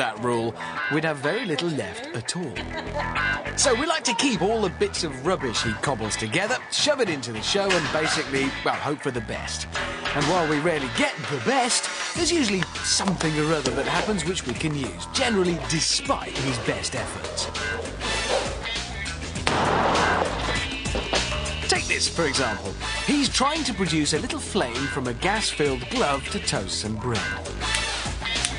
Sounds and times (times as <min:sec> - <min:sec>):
Speech: 0:00.0 - 0:02.6, 0:03.6 - 0:17.5, 0:21.7 - 0:27.4
Music: 0:00.0 - 0:28.5.